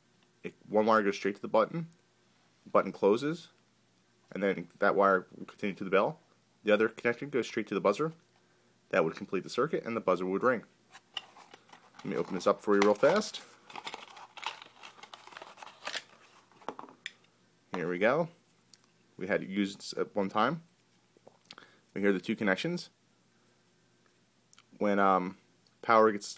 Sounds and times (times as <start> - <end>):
Speech: 0.5 - 1.9, 2.7 - 3.6, 4.3 - 8.2, 8.9 - 10.7, 12.0 - 13.4, 17.7 - 18.4, 19.2 - 20.7, 22.0 - 23.0, 24.8 - 26.3.